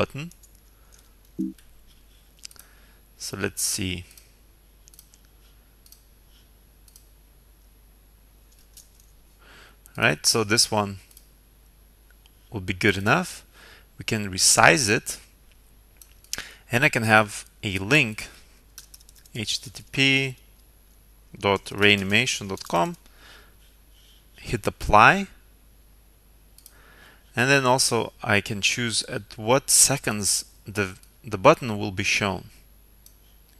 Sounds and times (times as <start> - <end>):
Speech: 0.0 - 0.4, 3.2 - 4.1, 9.9 - 11.1, 12.5 - 13.4, 14.0 - 15.3, 16.7 - 18.4, 19.4 - 20.4, 21.4 - 23.0, 24.4 - 25.4, 27.4 - 32.6
Clicking: 4.9 - 5.2, 5.8 - 6.0, 6.9 - 7.1.